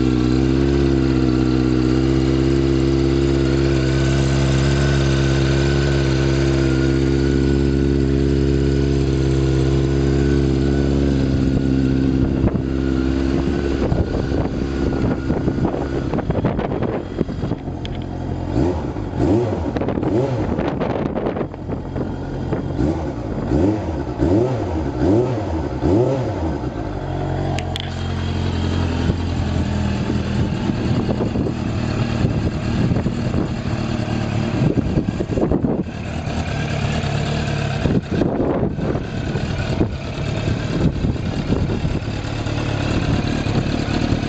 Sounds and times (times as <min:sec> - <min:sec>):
Idling: 0:00.0 - 0:24.2, 0:26.5 - 0:44.2
Motorcycle: 0:00.0 - 0:44.2.